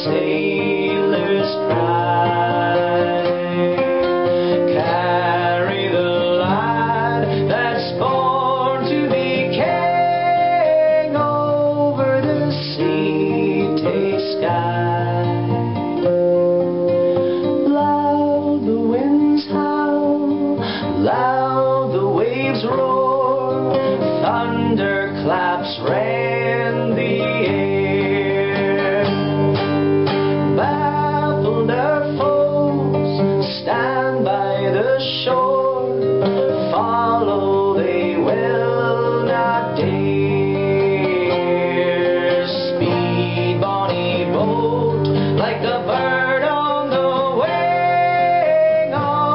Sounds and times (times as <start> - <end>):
Music: 0.0 - 49.3.